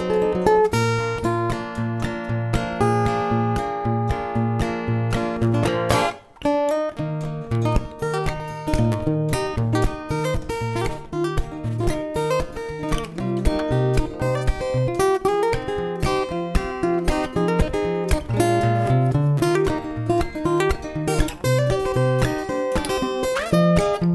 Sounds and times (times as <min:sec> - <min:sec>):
Acoustic guitar: 0:00.0 - 0:24.1
Strum: 0:00.0 - 0:24.1.